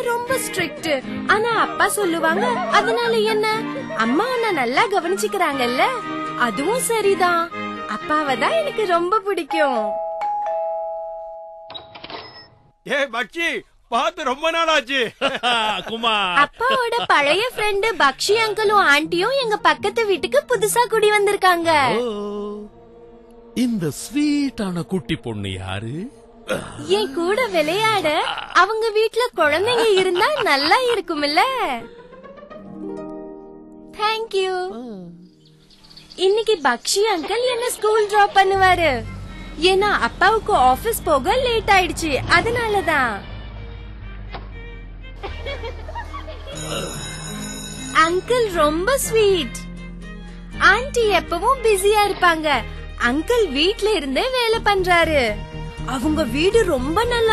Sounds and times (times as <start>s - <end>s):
Music: 0.0s - 10.1s, 17.1s - 57.3s.